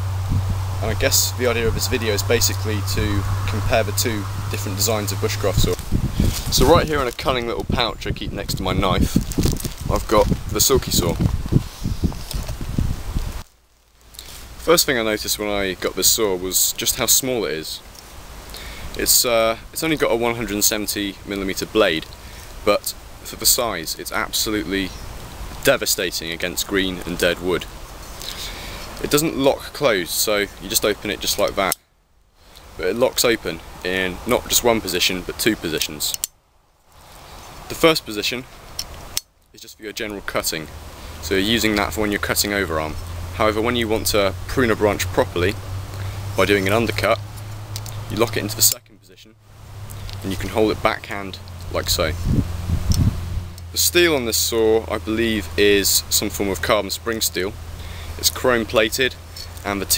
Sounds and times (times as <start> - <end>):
Speech: 0.8 - 5.8, 6.5 - 9.2, 9.9 - 11.2, 14.6 - 17.8, 19.0 - 25.0, 25.6 - 27.7, 29.0 - 31.8, 32.8 - 36.2, 37.7 - 38.5, 39.6 - 45.6, 46.4 - 47.2, 48.1 - 49.4, 50.2 - 52.2, 53.7 - 57.6, 58.2 - 59.9.